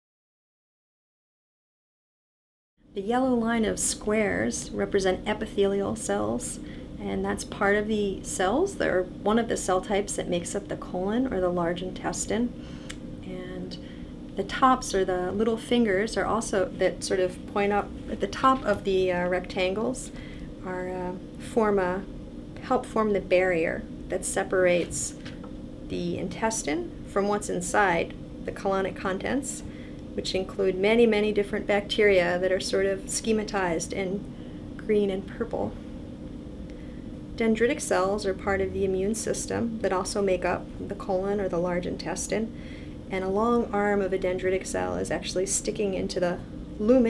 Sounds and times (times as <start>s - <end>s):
Speech: 3.0s - 12.5s, 13.2s - 13.8s, 14.4s - 25.2s, 25.9s - 35.8s, 37.4s - 42.5s, 43.1s - 47.0s.